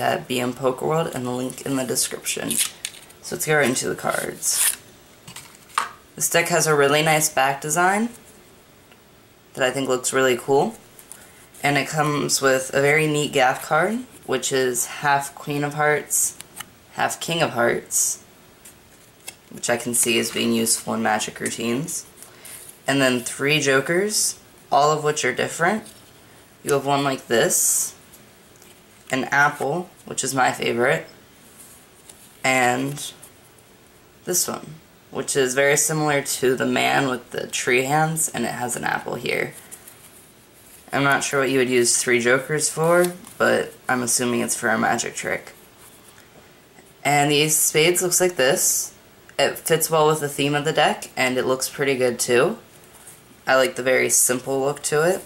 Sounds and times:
Speech: 0.0 - 2.6, 3.2 - 4.7, 6.2 - 8.2, 9.6 - 10.8, 11.6 - 18.3, 19.5 - 22.1, 22.9 - 26.0, 26.6 - 28.0, 29.1 - 31.1, 32.4 - 33.2, 34.2 - 39.6, 40.9 - 45.6, 47.0 - 52.6, 53.4 - 55.2.

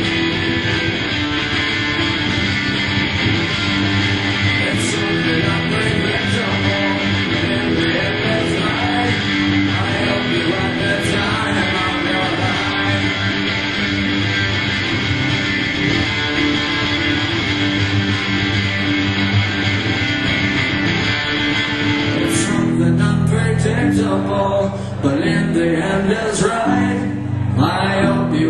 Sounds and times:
Vocal music: 0.0 - 28.5
Singing: 4.4 - 13.9, 22.2 - 28.5.

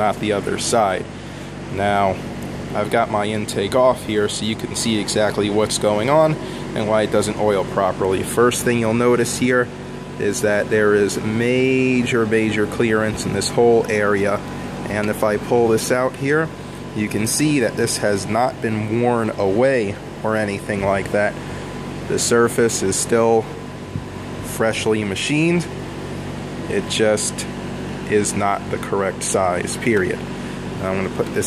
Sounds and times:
Speech: 0.0 - 1.1, 1.7 - 2.2, 2.8 - 21.4, 22.1 - 23.6, 24.5 - 25.7, 26.7 - 31.4.

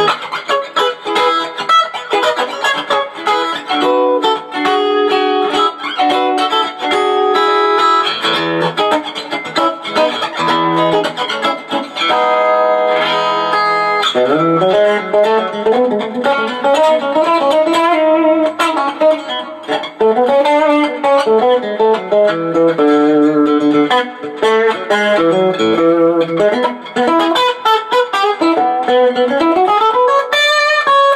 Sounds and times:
Electric guitar: 0.0 - 31.1.

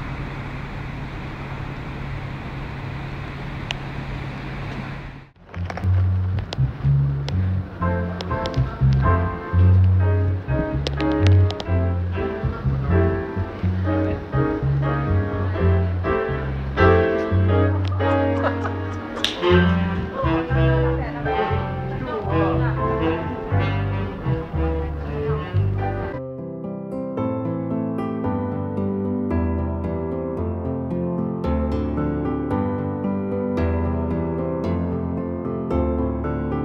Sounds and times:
Music: 5.5 - 36.6
Speech: 20.0 - 26.2.

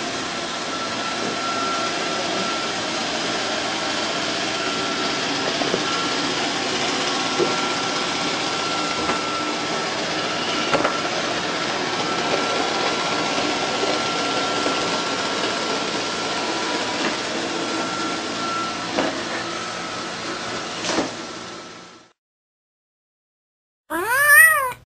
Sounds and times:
Meow: 23.9 - 24.8.

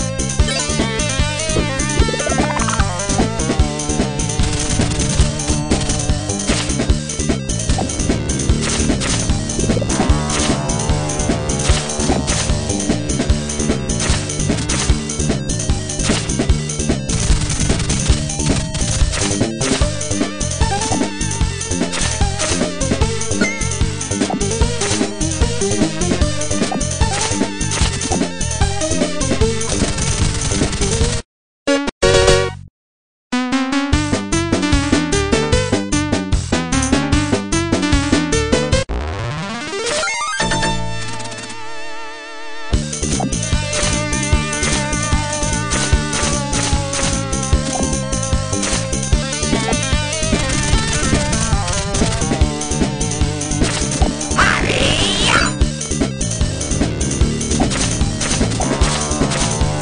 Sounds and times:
Music: 0.0 - 32.7, 33.4 - 59.8.

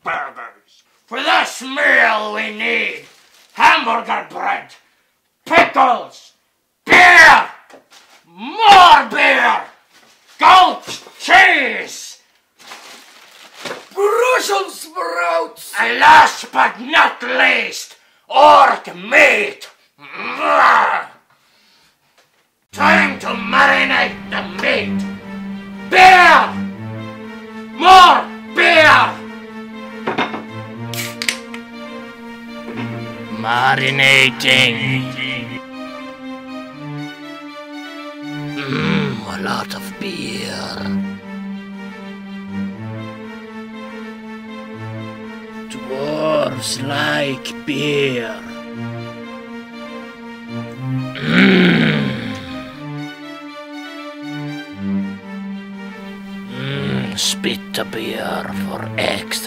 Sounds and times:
Speech: 0.0 - 4.8, 5.5 - 7.6, 8.3 - 9.8, 10.4 - 12.2, 14.0 - 21.2, 22.8 - 25.0, 25.9 - 26.6, 27.8 - 29.2, 33.3 - 35.6, 38.6 - 41.0, 45.7 - 48.5, 56.5 - 59.4
Music: 8.4 - 9.7, 14.0 - 17.5, 22.7 - 59.4.

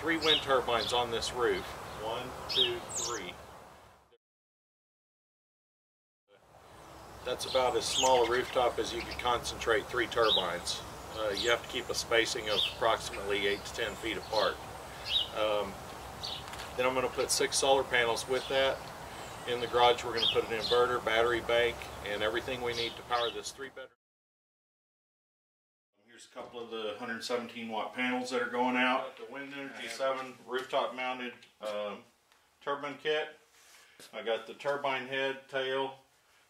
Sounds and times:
Speech: 0.0 - 3.4, 7.3 - 14.6, 15.3 - 15.8, 16.8 - 18.8, 19.5 - 24.0, 26.0 - 33.4, 34.1 - 36.0.

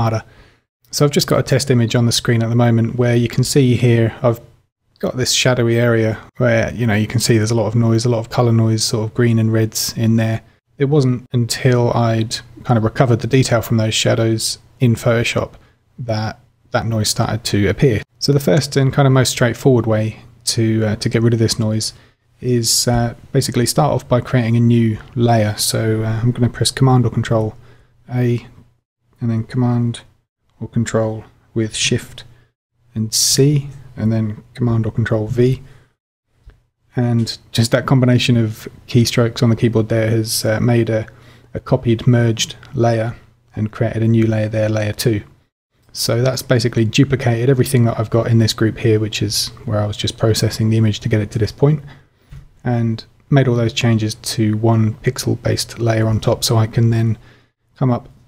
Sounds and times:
Speech: 0.0 - 0.3, 0.9 - 28.6, 29.2 - 35.7, 36.9 - 52.0, 52.6 - 57.2, 57.8 - 58.2.

